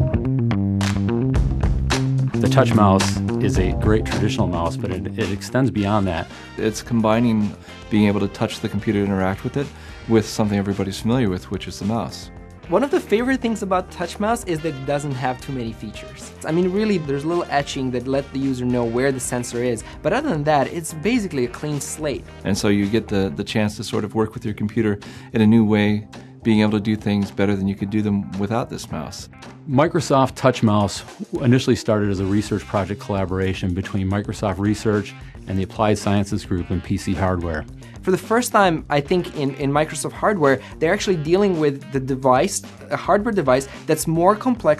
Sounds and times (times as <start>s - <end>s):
Music: 0.0s - 44.7s
Speech: 2.4s - 44.7s.